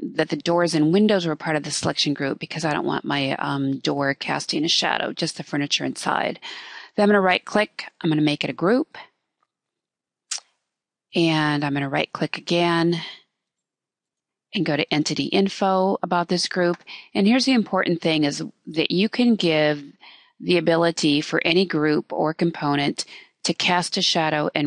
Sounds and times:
Speech: 0.0 - 9.1, 11.2 - 13.2, 14.6 - 24.6.

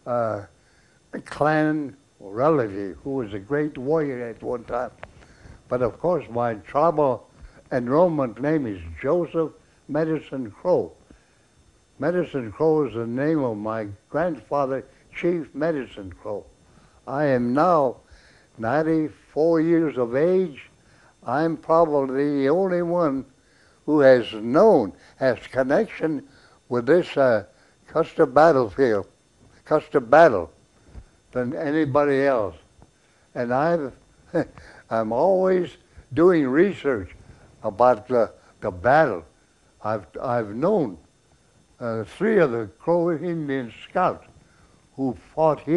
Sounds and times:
Speech: 0.0 - 0.5, 1.2 - 5.0, 5.7 - 11.0, 12.0 - 18.0, 18.6 - 23.3, 23.9 - 30.6, 31.3 - 32.7, 33.3 - 41.1, 41.8 - 44.3, 45.0 - 45.7.

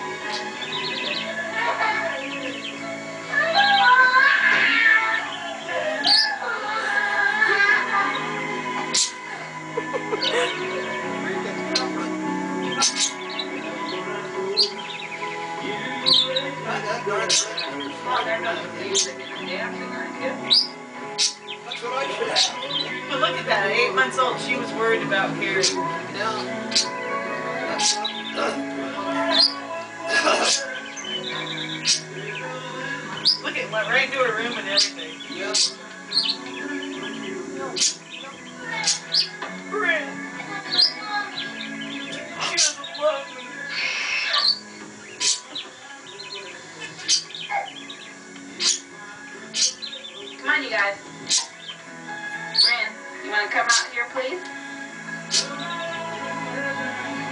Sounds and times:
Music: 0.0 - 57.3.

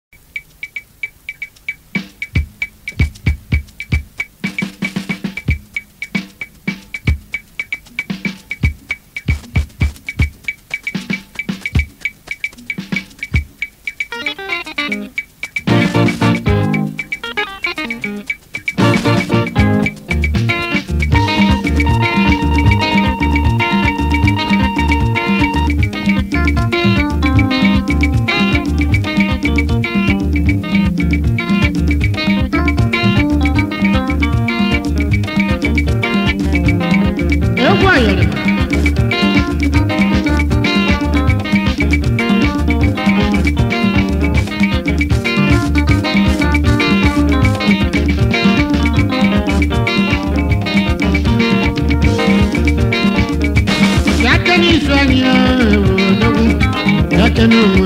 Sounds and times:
Music: 1.4 - 57.8.

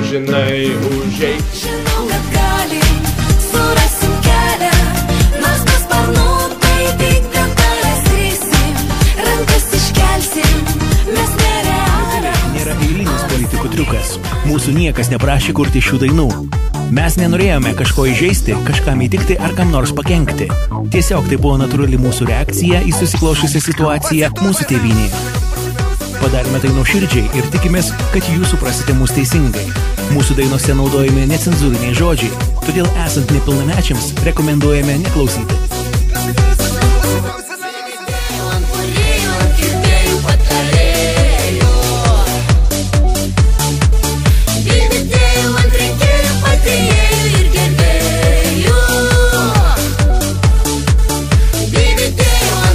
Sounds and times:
Speech: 0.0 - 1.5, 12.2 - 25.2, 26.1 - 35.6
Music: 0.0 - 52.7.

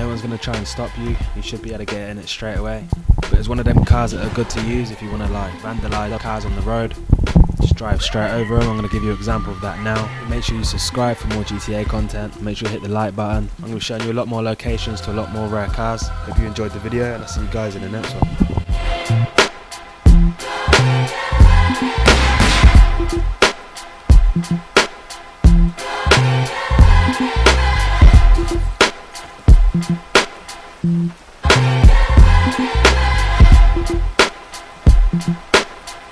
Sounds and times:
Speech: 0.0 - 7.0, 7.6 - 18.4
Music: 0.0 - 36.1.

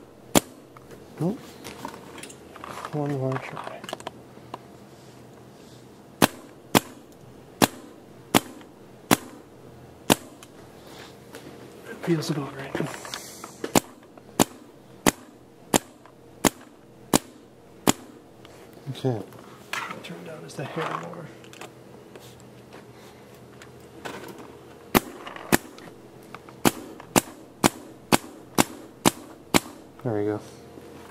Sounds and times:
Cap gun: 0.3 - 0.6, 6.2 - 7.0, 7.6 - 9.4, 10.1 - 10.4, 13.7 - 18.2, 24.9 - 25.8, 26.6 - 29.8.

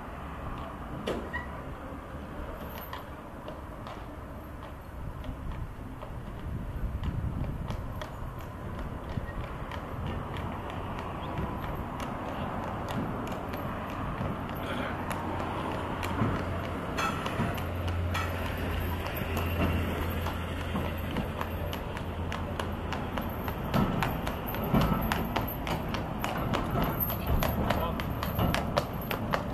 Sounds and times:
Clip-clop: 0.0 - 29.5.

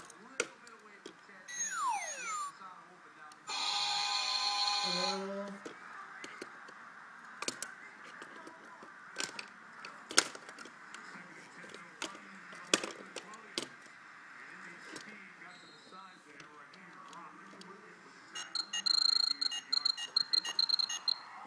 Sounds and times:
Speech: 14.5 - 20.1.

